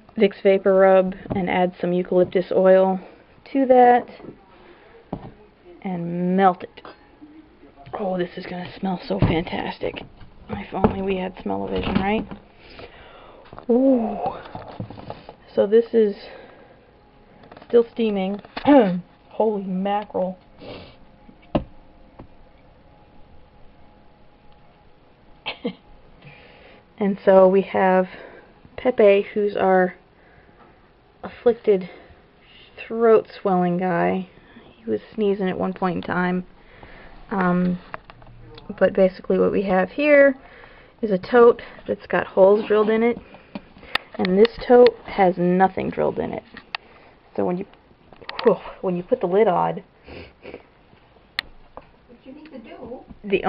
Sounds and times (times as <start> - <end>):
Inside, small room: 0.0 - 53.4.